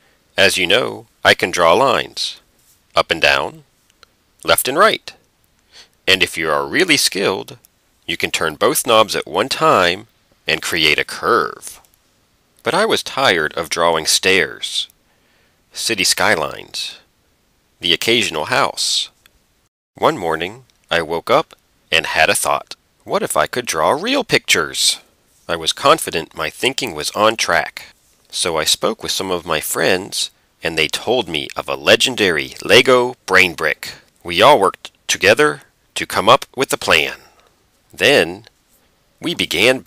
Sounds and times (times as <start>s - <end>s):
Speech: 0.4s - 2.4s, 3.0s - 3.7s, 4.4s - 5.2s, 6.1s - 11.9s, 12.6s - 14.9s, 15.7s - 17.1s, 17.8s - 19.2s, 20.0s - 38.5s, 39.2s - 39.8s.